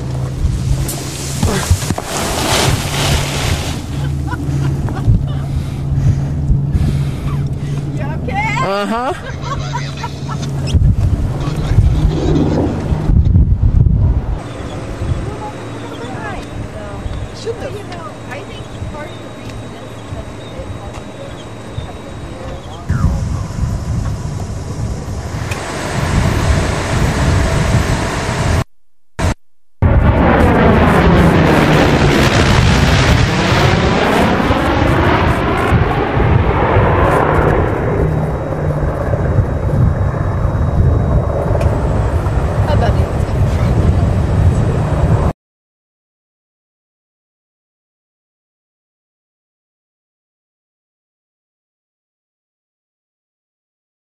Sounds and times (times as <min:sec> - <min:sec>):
Wind noise (microphone): 0:00.0 - 0:08.3, 0:09.2 - 0:15.4, 0:22.6 - 0:45.4.